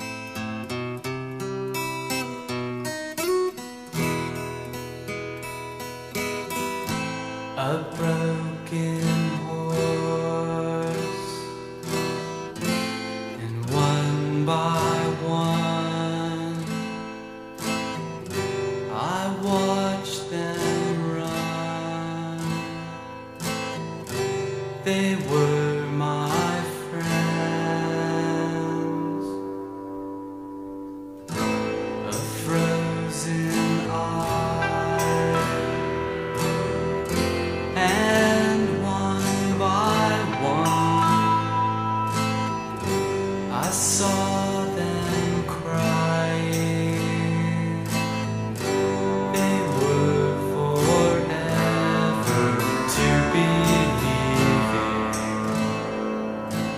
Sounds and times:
Music: 0.0s - 56.7s.

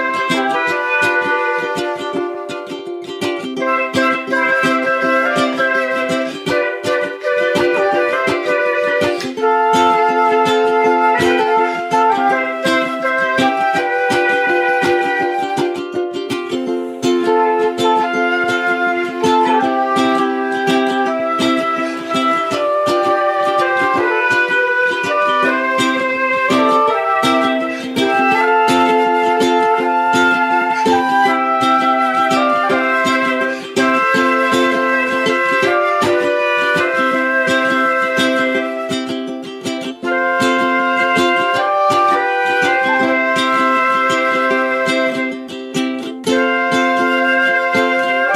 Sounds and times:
Flute: 0.0s - 48.3s
Ukulele: 0.0s - 48.3s.

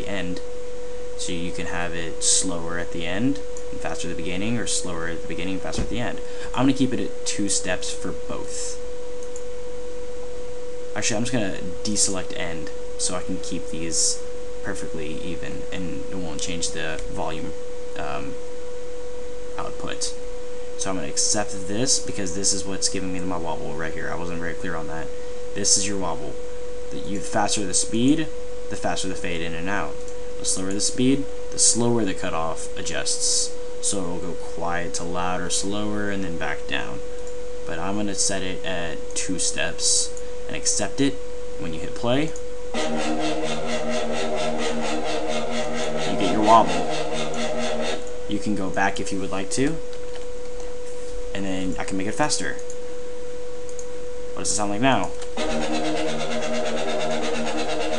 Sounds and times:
Speech: 0.0s - 0.4s, 1.2s - 8.8s, 11.0s - 18.4s, 19.6s - 20.2s, 20.8s - 37.0s, 37.7s - 42.4s, 45.9s - 47.0s, 48.3s - 49.8s, 51.3s - 52.7s, 54.4s - 55.2s.

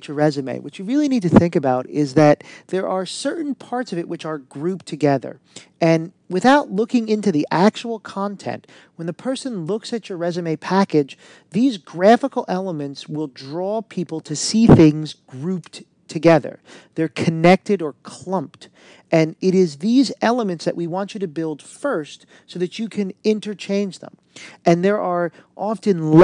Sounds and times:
Speech: 0.0s - 26.2s.

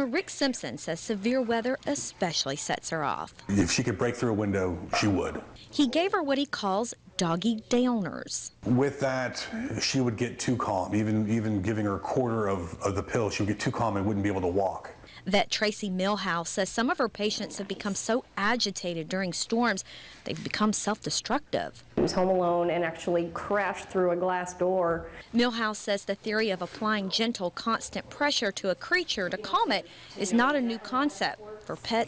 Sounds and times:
Speech: 0.0s - 15.0s.

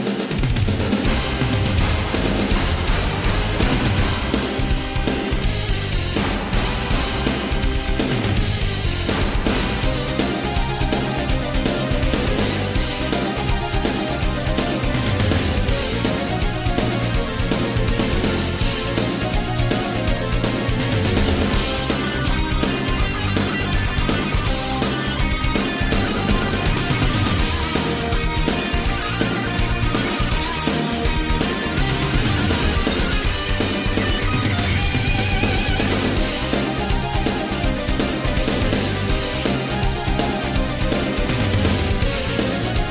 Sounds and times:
Music: 0.0s - 42.9s.

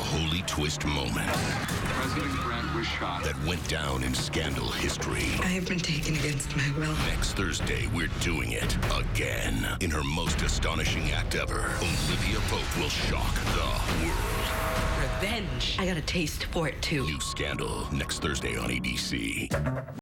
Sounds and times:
Speech: 0.0s - 14.3s, 15.0s - 19.6s
Music: 0.0s - 20.0s.

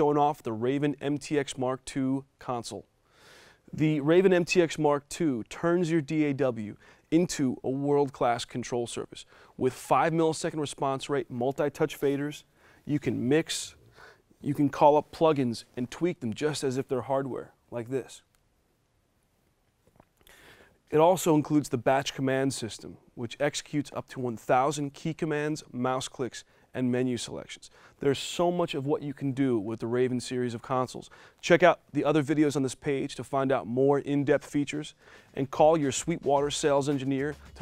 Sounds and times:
Speech: 0.0s - 2.9s, 3.7s - 13.8s, 14.4s - 18.3s, 20.9s - 37.6s.

